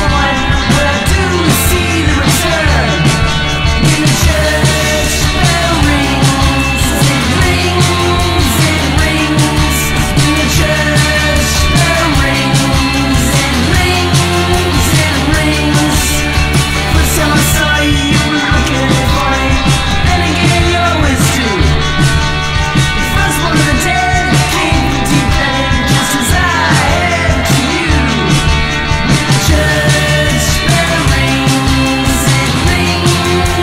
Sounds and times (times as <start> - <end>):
Music: 0.0 - 33.6.